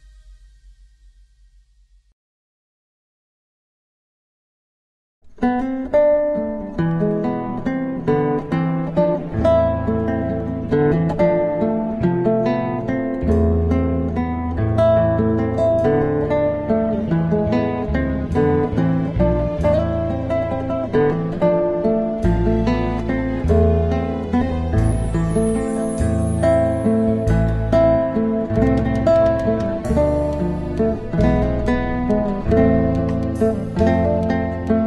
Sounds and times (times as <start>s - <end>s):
Acoustic guitar: 5.3s - 34.8s.